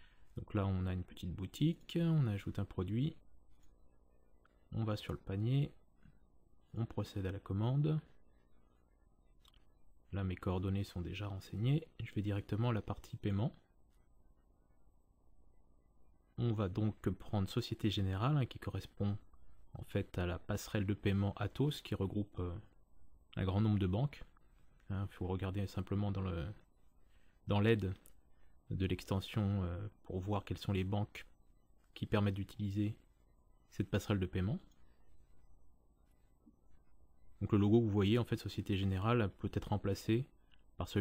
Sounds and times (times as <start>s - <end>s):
Speech: 0.4s - 3.3s, 4.7s - 5.8s, 6.7s - 8.2s, 9.5s - 13.7s, 16.4s - 26.7s, 27.5s - 33.1s, 33.7s - 34.7s, 37.4s - 41.0s.